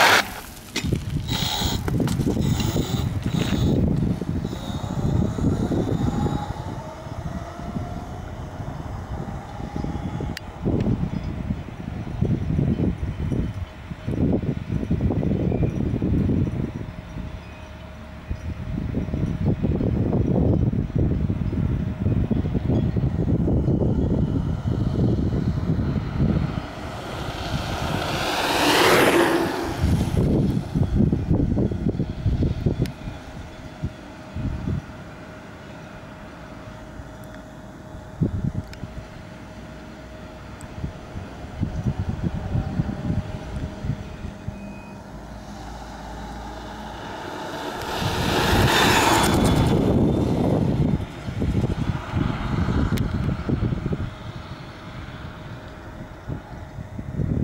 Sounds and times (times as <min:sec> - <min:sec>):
Bicycle: 0:00.0 - 0:33.6, 0:41.6 - 0:56.4
Outside, urban or manmade: 0:00.0 - 0:57.4.